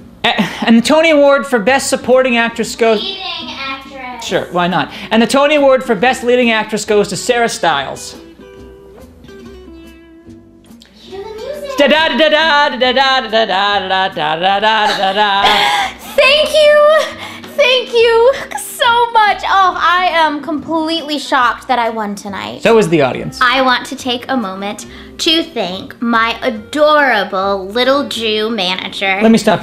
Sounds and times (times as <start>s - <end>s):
Music: 1.2s - 29.6s
Female speech, woman speaking: 16.1s - 22.6s, 23.4s - 29.6s.